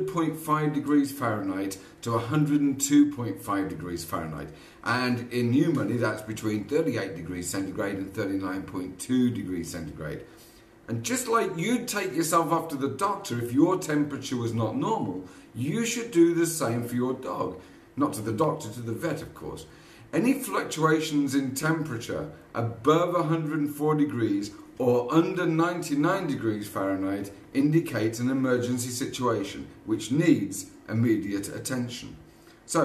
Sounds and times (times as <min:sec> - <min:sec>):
Speech: 0:00.0 - 0:10.3, 0:10.9 - 0:32.8.